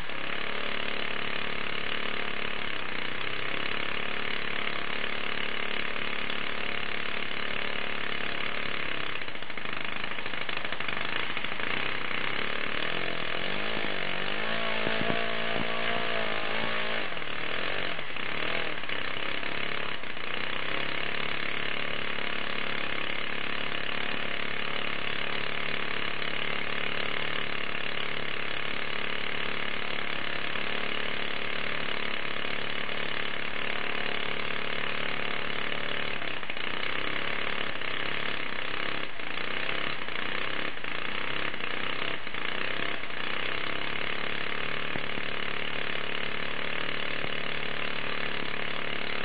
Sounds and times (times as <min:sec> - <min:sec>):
Engine: 0:00.0 - 0:49.2.